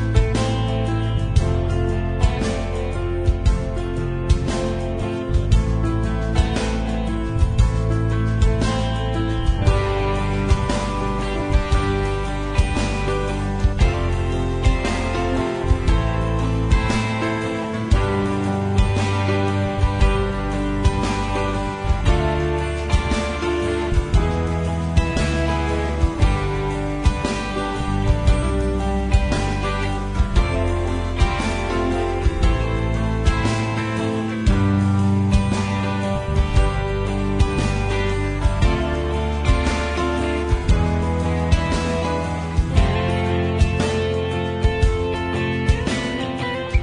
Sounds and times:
Music: 0.0 - 46.8.

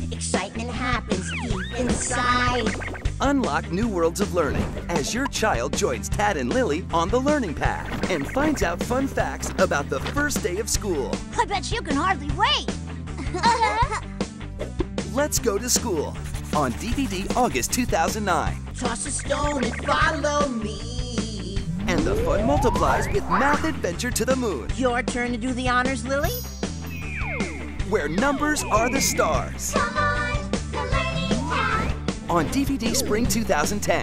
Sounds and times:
Speech: 0.0 - 12.6, 15.1 - 26.2, 27.9 - 29.8, 32.3 - 34.0
Music: 0.0 - 34.0.

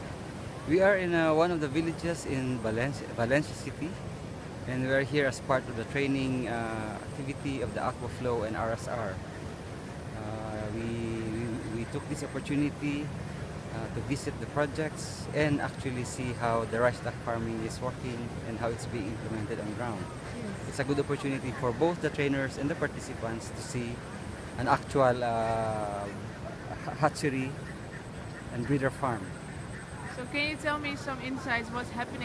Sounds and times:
Speech: 0.7 - 4.0, 4.7 - 9.2, 10.2 - 13.1, 13.8 - 24.0, 24.6 - 26.2, 26.8 - 27.6, 28.6 - 29.3, 30.2 - 32.2.

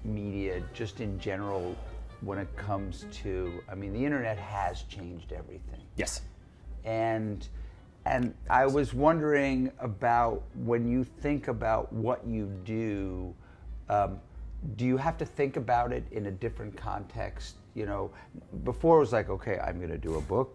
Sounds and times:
Speech: 0.0 - 6.2, 6.8 - 7.5, 8.1 - 20.5.

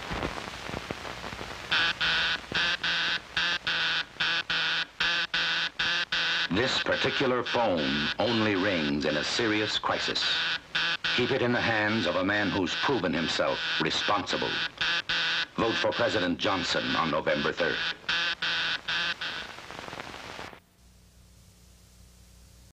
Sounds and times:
Speech: 6.5 - 10.4, 11.2 - 14.7, 15.6 - 17.9.

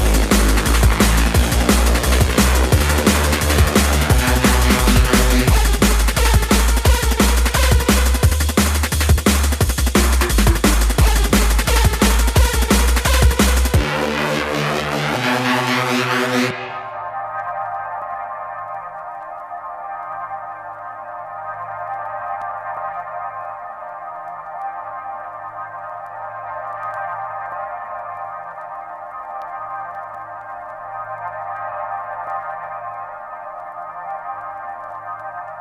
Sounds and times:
Drum and bass: 0.0 - 35.6.

